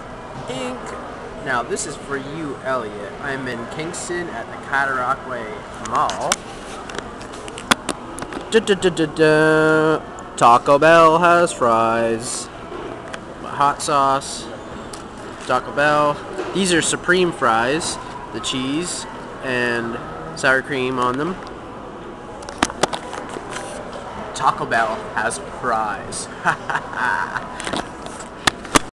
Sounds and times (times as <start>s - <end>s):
Speech: 0.5s - 6.4s, 8.5s - 12.5s, 15.5s - 21.4s, 24.4s - 26.3s.